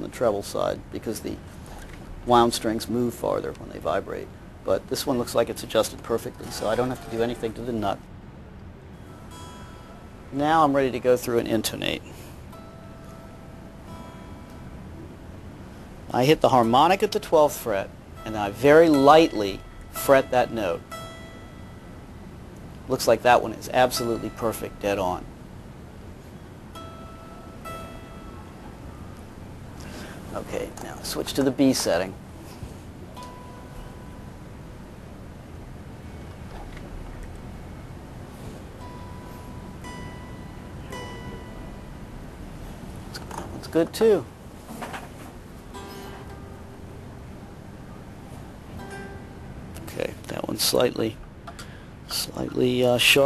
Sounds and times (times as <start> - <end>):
Speech: 0.0 - 1.4, 2.3 - 8.0, 10.4 - 12.1, 16.1 - 20.8, 22.9 - 25.3, 30.3 - 32.2, 43.2 - 44.3, 49.8 - 51.2, 52.1 - 53.2
Strum: 5.0 - 8.0, 8.9 - 53.1.